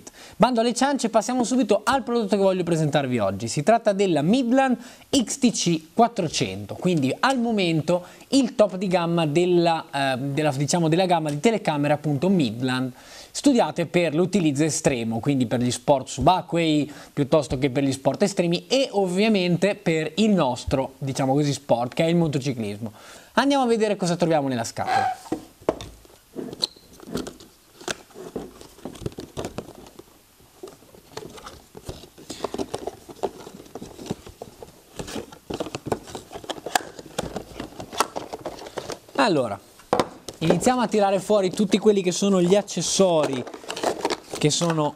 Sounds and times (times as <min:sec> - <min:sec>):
Speech: 0:00.4 - 0:25.2, 0:39.2 - 0:39.6, 0:40.4 - 0:43.5, 0:44.4 - 0:44.9.